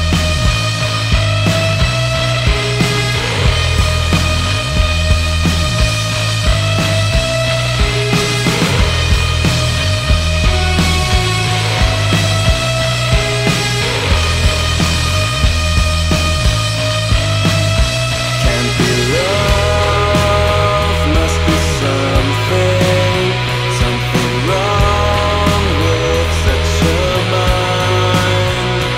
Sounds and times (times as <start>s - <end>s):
Funk: 0.0s - 28.9s
Rhythm and blues: 0.0s - 28.9s
Soul music: 0.0s - 28.9s.